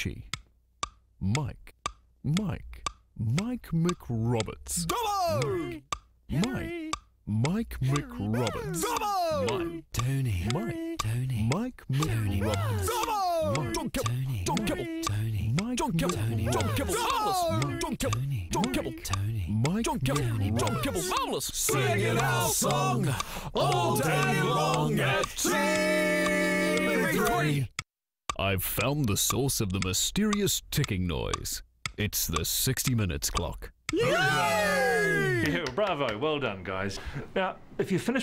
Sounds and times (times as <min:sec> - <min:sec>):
Speech: 0:00.0 - 0:00.3, 0:01.2 - 0:27.7, 0:28.4 - 0:38.2.